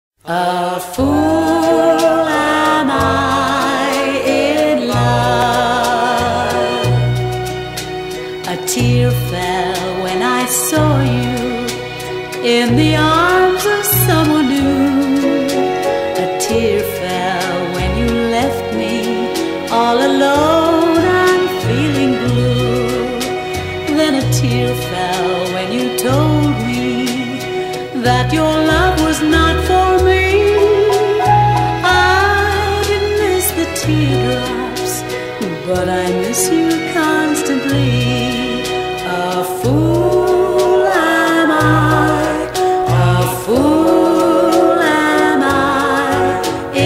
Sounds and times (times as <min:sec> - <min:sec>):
Music: 0:00.2 - 0:46.8.